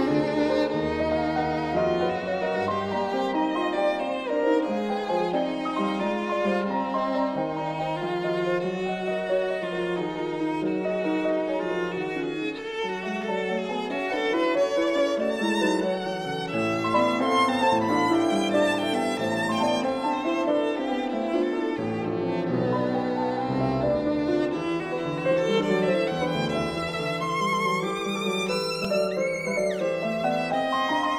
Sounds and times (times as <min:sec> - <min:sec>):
Violin, fiddle: 0:00.0 - 0:31.1.